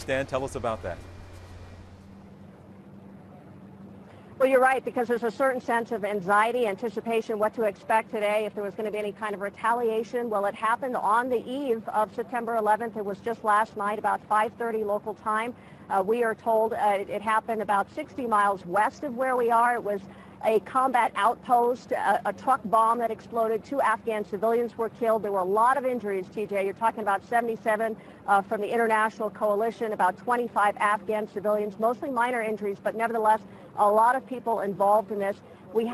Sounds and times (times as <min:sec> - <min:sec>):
Speech: 0:00.0 - 0:01.0, 0:04.4 - 0:35.9.